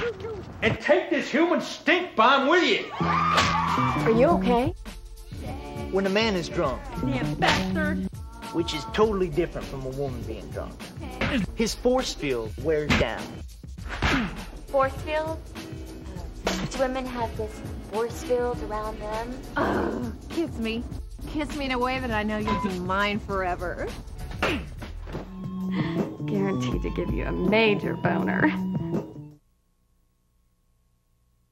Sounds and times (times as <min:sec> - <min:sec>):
Music: 0:02.9 - 0:29.4.